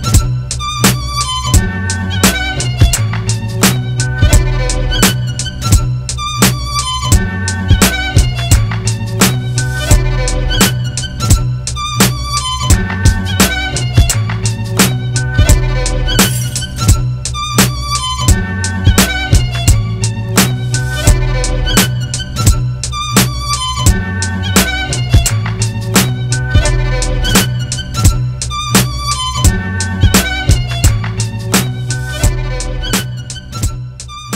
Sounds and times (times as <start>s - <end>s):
Violin, fiddle: 0.0s - 34.3s.